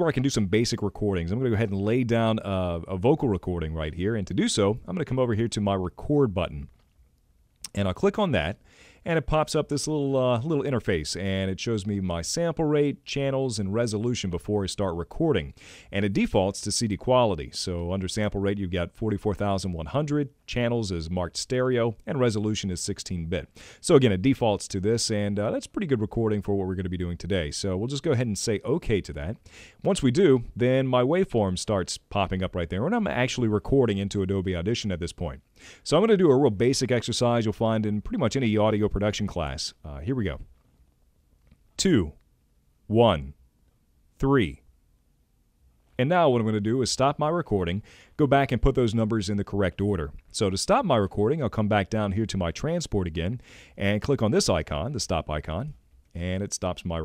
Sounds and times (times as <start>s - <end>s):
Speech: 0.0s - 6.8s, 7.7s - 40.5s, 41.8s - 42.2s, 42.9s - 43.4s, 44.2s - 44.7s, 46.0s - 57.0s.